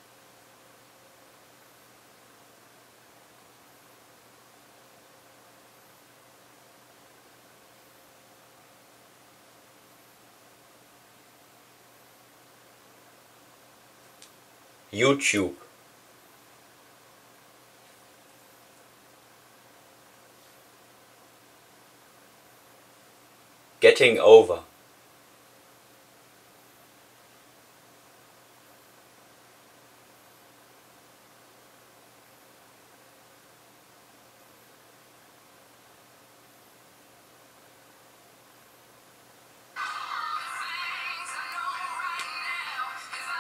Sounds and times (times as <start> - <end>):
Narration, monologue: 14.9 - 15.8, 23.8 - 24.8
Male speech, man speaking: 15.0 - 15.7, 23.8 - 24.7.